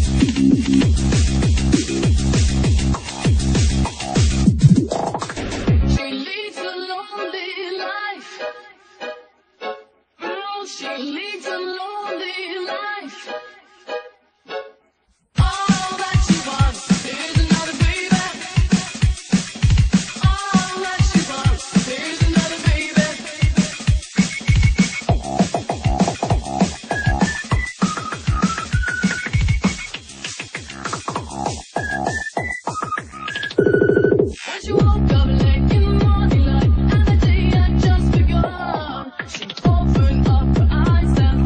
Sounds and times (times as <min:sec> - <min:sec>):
Electronic music: 0:00.0 - 0:06.1, 0:15.4 - 0:38.6.